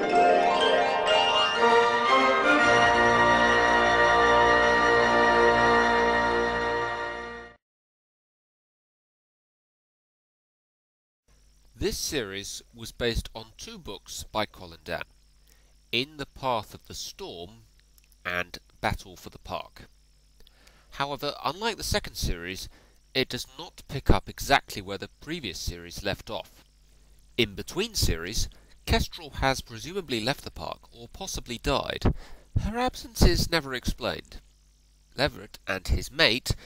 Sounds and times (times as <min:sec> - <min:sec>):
Speech: 0:11.8 - 0:15.1, 0:16.0 - 0:17.6, 0:18.2 - 0:19.9, 0:20.9 - 0:26.6, 0:27.4 - 0:34.4, 0:35.2 - 0:36.6.